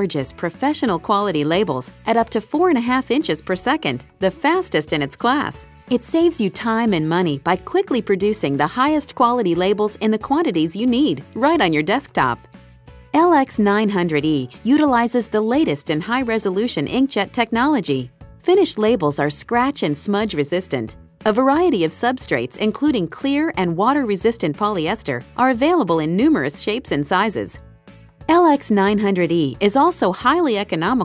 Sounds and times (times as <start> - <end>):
Speech: 0.0 - 12.4, 13.2 - 27.6, 28.3 - 31.0
Music: 0.0 - 31.0.